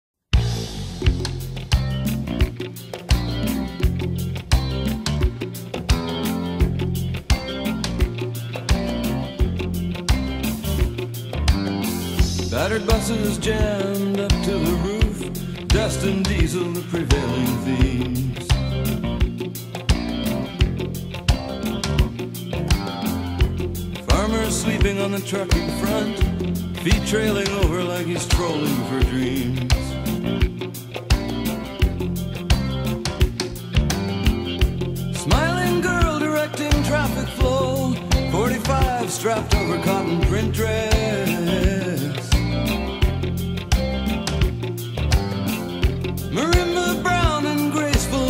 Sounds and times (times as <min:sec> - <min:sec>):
Music: 0:00.3 - 0:48.2.